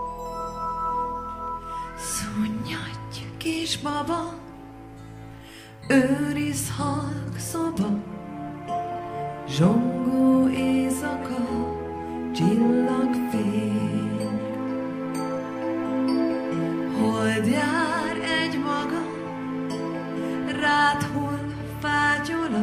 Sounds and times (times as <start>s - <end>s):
Music: 0.0s - 22.6s.